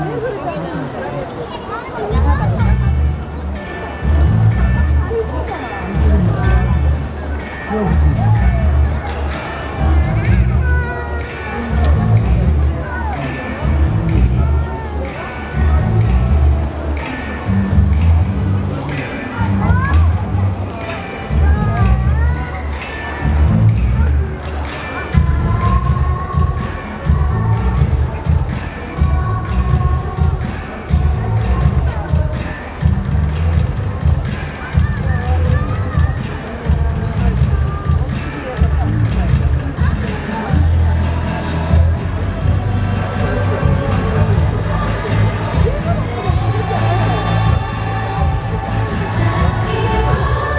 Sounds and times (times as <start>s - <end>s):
Speech: 0.0s - 50.5s
Music: 1.8s - 50.5s.